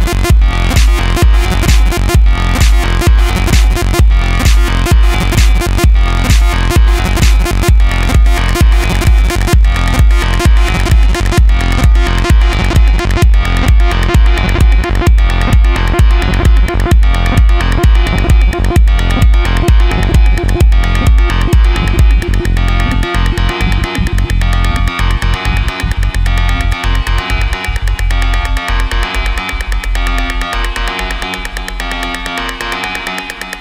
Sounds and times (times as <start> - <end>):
Drum machine: 0.0 - 33.6.